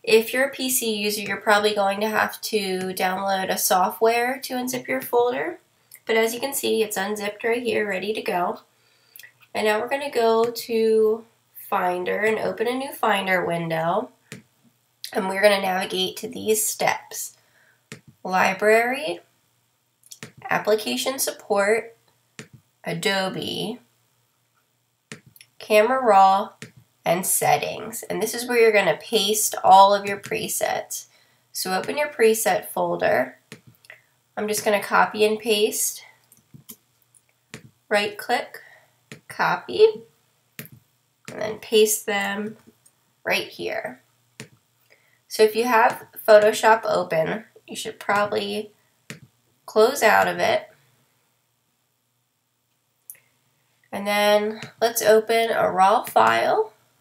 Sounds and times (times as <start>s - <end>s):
Speech: 0.1s - 8.6s, 9.6s - 14.2s, 15.1s - 17.3s, 18.3s - 19.3s, 20.4s - 22.0s, 22.9s - 23.8s, 25.6s - 31.0s, 31.6s - 33.4s, 34.4s - 36.1s, 37.9s - 38.7s, 39.3s - 40.1s, 41.3s - 42.6s, 43.3s - 44.0s, 45.3s - 48.7s, 49.7s - 50.7s, 54.0s - 56.8s.